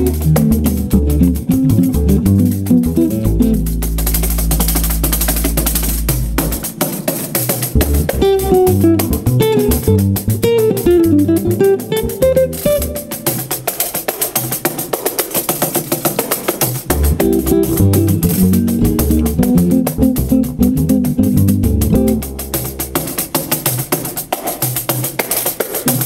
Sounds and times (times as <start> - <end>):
Cello: 0.0 - 13.4, 16.9 - 24.4
Double bass: 0.0 - 13.4, 16.8 - 24.1
Guitar: 0.0 - 24.8.